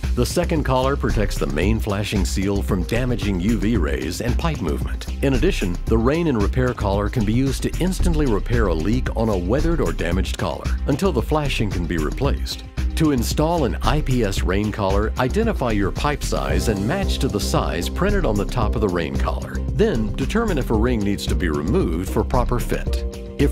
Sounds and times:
Music: 0:00.0 - 0:23.5
Speech: 0:00.2 - 0:23.5.

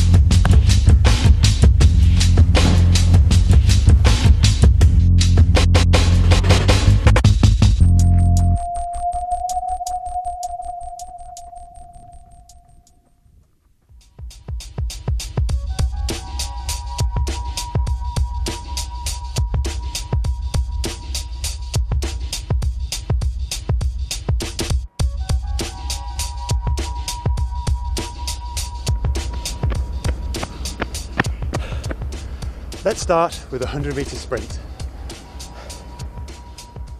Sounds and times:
Music: 0:00.0 - 0:11.9, 0:13.9 - 0:36.9.

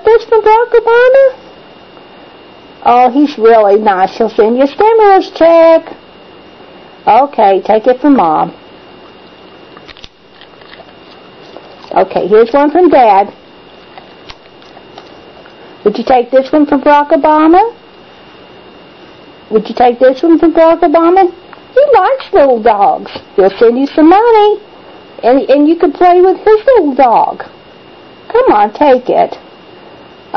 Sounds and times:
Speech: 0:00.0 - 0:01.4, 0:02.8 - 0:06.0, 0:07.1 - 0:08.6, 0:11.9 - 0:13.4, 0:15.8 - 0:17.8, 0:19.5 - 0:24.6, 0:25.2 - 0:27.6, 0:28.3 - 0:29.4.

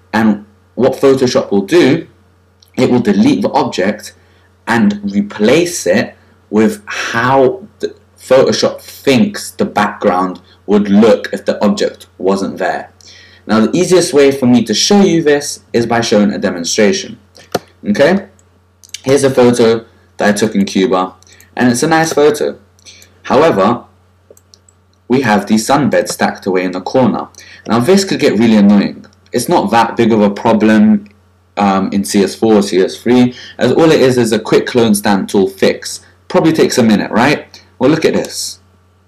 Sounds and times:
Speech: 0:00.1 - 0:24.0, 0:25.1 - 0:38.7.

